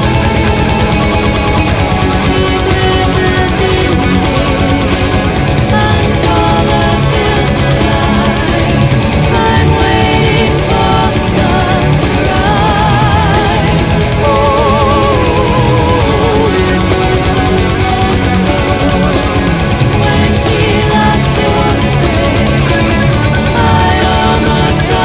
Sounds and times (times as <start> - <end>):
Music: 0.0 - 25.0.